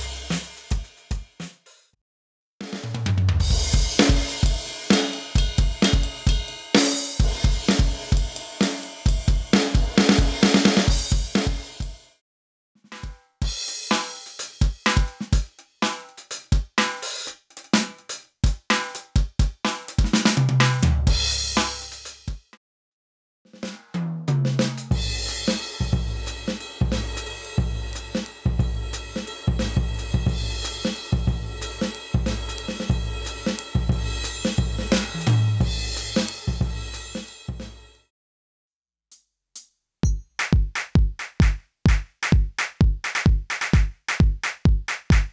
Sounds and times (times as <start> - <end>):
Drum: 0.0 - 1.9, 2.6 - 12.0, 12.9 - 22.6, 23.5 - 37.9, 40.1 - 45.3
Drum kit: 0.0 - 2.0, 2.6 - 12.1, 12.9 - 22.6, 23.5 - 37.9, 40.0 - 45.3.